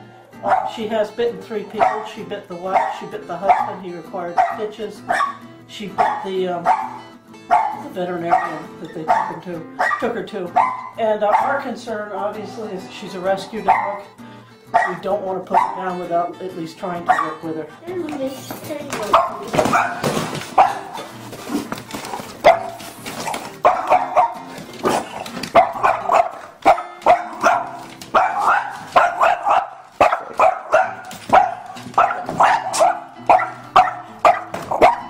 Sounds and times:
Music: 0.0s - 35.0s
Yip: 0.4s - 0.7s, 1.8s - 2.1s, 2.8s - 3.8s, 4.4s - 5.4s, 6.0s - 11.5s, 13.7s - 14.0s, 14.8s - 15.8s, 17.1s - 17.3s, 19.1s - 21.0s, 22.4s - 35.0s
Bow-wow: 0.4s - 0.8s, 1.8s - 2.1s, 2.8s - 3.8s, 4.4s - 5.4s, 6.0s - 11.6s, 13.7s - 14.0s, 14.7s - 15.8s, 17.1s - 17.4s, 19.1s - 21.1s, 22.4s - 35.0s
Speech: 7.8s - 14.0s, 14.9s - 19.6s.

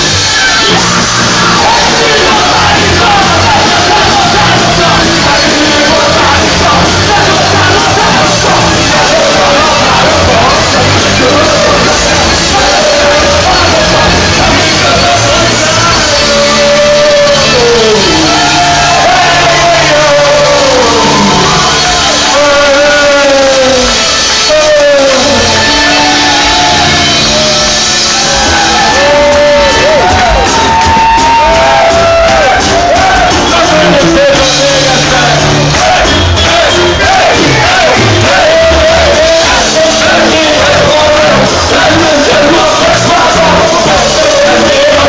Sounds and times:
Musical instrument: 0.0s - 45.0s.

